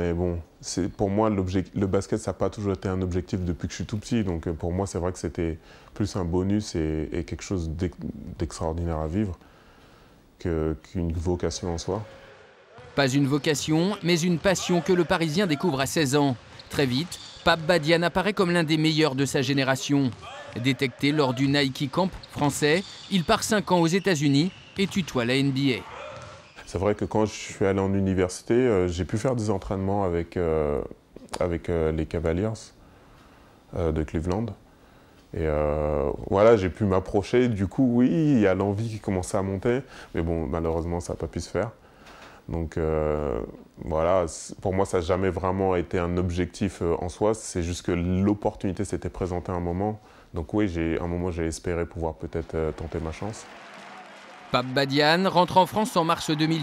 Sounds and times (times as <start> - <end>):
Speech: 0.0 - 9.4, 10.4 - 12.2, 12.9 - 25.9, 26.6 - 32.8, 33.7 - 34.6, 35.4 - 41.8, 42.5 - 53.5, 54.6 - 56.6.